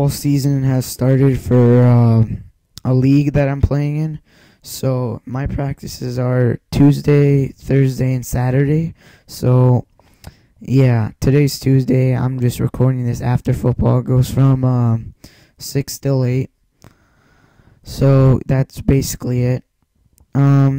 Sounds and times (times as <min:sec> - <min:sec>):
Speech: 0:00.0 - 0:09.9, 0:10.6 - 0:16.5, 0:17.8 - 0:19.7, 0:20.3 - 0:20.7.